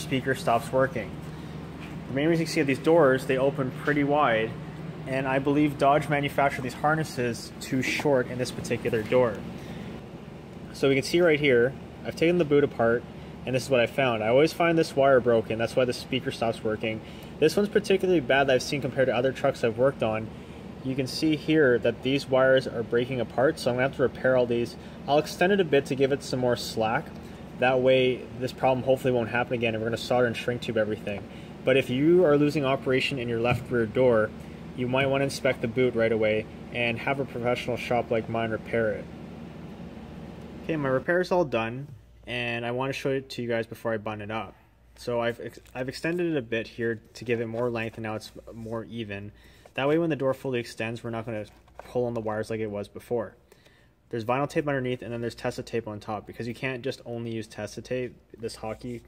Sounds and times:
Speech: 0:00.0 - 0:01.2, 0:02.1 - 0:09.5, 0:10.7 - 0:39.1, 0:40.6 - 0:53.4, 0:54.1 - 0:59.0.

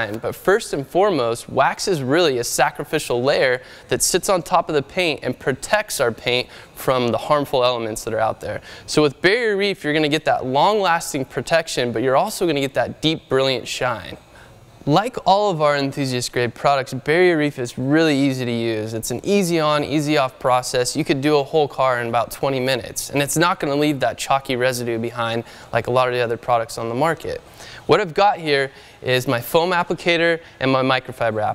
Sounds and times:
Speech: 0:00.0 - 0:14.2, 0:14.9 - 0:31.5.

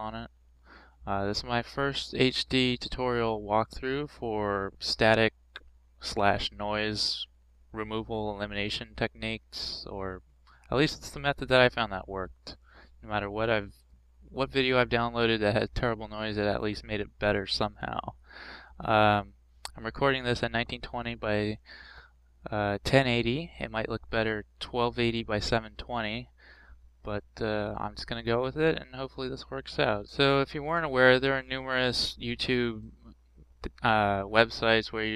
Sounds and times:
Speech: 0:00.0 - 0:00.3, 0:01.1 - 0:05.4, 0:06.0 - 0:13.7, 0:14.3 - 0:18.2, 0:18.8 - 0:21.7, 0:22.5 - 0:26.3, 0:27.0 - 0:35.1.

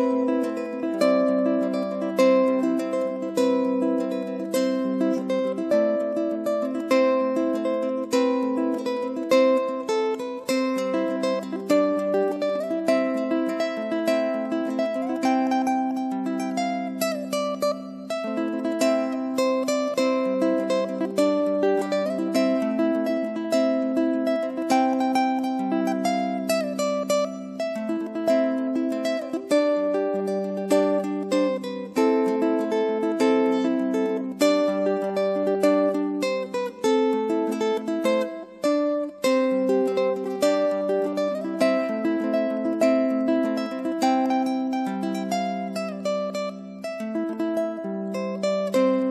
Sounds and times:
Music: 0:00.0 - 0:49.1.

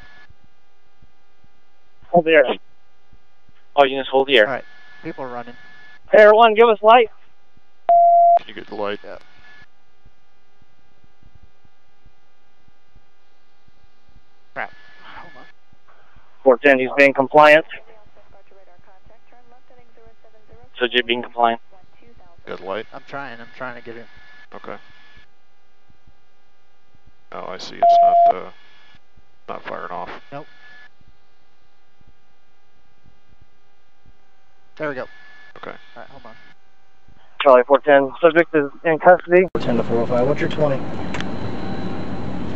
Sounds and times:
Speech: 0:02.2 - 0:02.6, 0:03.8 - 0:05.6, 0:08.4 - 0:09.2, 0:16.5 - 0:24.8, 0:27.3 - 0:28.5, 0:29.5 - 0:30.5, 0:34.8 - 0:36.4.

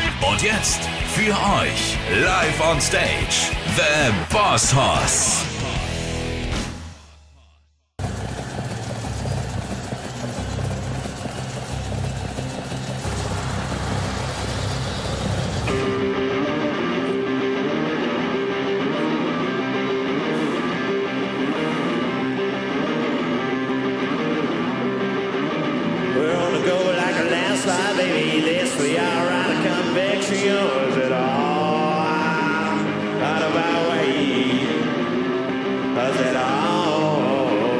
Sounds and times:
Music: 0:00.0 - 0:37.8.

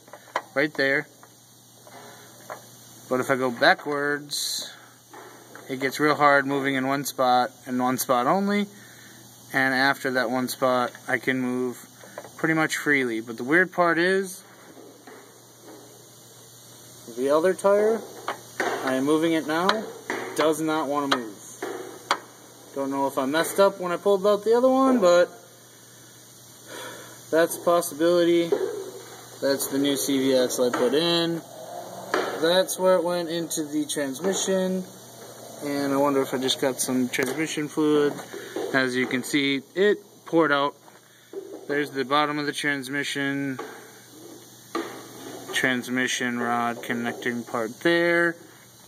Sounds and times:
Speech: 0:00.6 - 0:01.1, 0:03.1 - 0:04.8, 0:05.7 - 0:08.8, 0:09.5 - 0:14.5, 0:17.1 - 0:18.1, 0:18.8 - 0:21.6, 0:22.7 - 0:25.4, 0:27.3 - 0:28.6, 0:29.4 - 0:31.4, 0:32.4 - 0:34.9, 0:35.6 - 0:40.8, 0:41.7 - 0:43.7, 0:45.5 - 0:48.4.

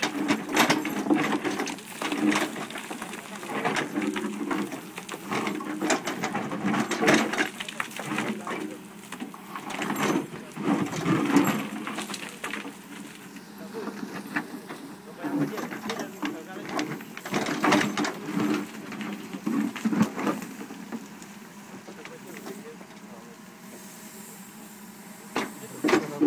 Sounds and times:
Speech: 0:07.0 - 0:08.9, 0:13.5 - 0:17.0, 0:21.8 - 0:23.5, 0:25.4 - 0:26.2.

